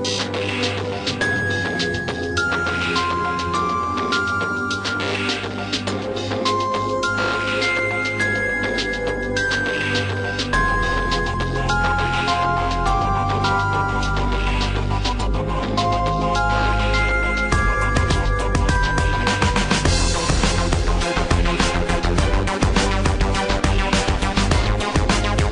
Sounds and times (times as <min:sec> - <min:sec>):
Video game music: 0:00.0 - 0:25.5.